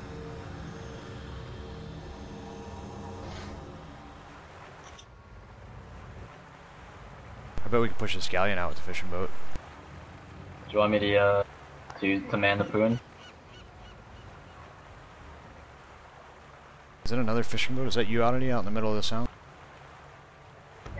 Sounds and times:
Speech: 7.6 - 9.3, 10.7 - 13.0, 17.1 - 19.3.

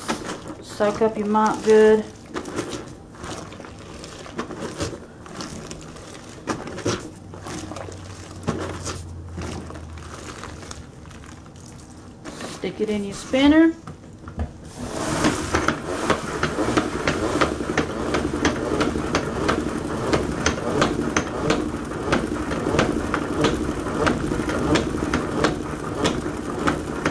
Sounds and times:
Inside, small room: 0.0 - 27.1
Speech: 0.6 - 2.2, 12.6 - 13.8.

